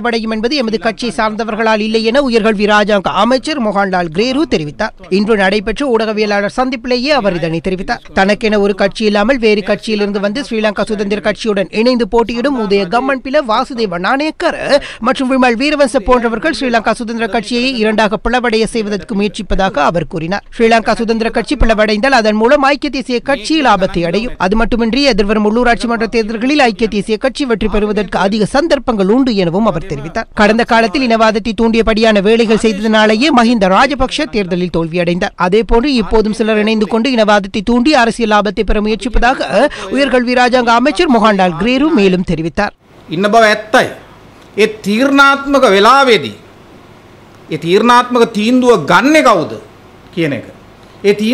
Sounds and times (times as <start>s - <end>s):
Male speech, man speaking: 0.0s - 42.4s, 43.1s - 44.0s, 44.6s - 46.4s, 47.5s - 51.3s
Narration, monologue: 0.0s - 51.3s.